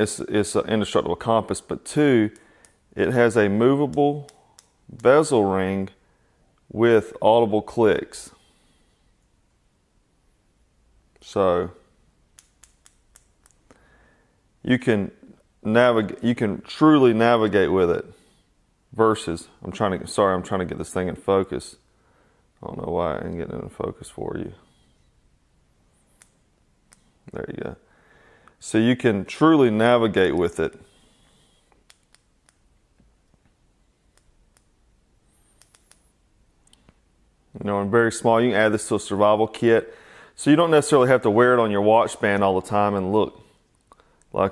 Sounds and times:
Speech: 0.0s - 2.4s, 3.0s - 4.3s, 4.9s - 6.0s, 6.7s - 8.4s, 11.2s - 11.8s, 14.6s - 18.2s, 18.9s - 21.8s, 22.6s - 24.6s, 27.3s - 27.8s, 28.6s - 30.9s, 37.5s - 43.4s, 44.3s - 44.5s
Inside, small room: 0.0s - 44.5s.

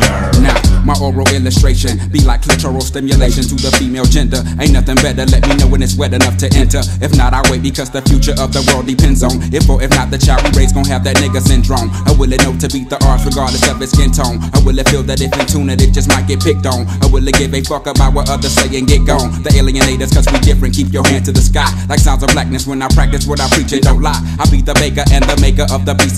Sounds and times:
Rapping: 0.0s - 26.1s.

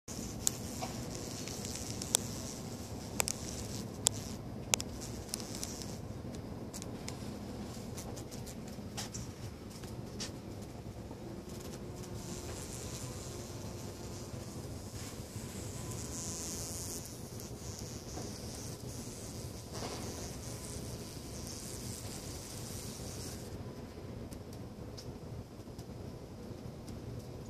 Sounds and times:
Bee, wasp, etc.: 0.1s - 6.1s, 11.5s - 23.6s.

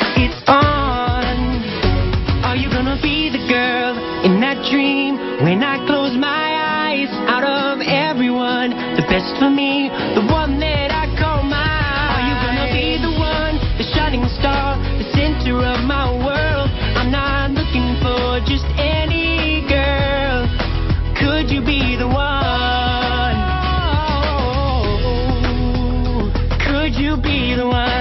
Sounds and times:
Music: 0.0s - 28.0s.

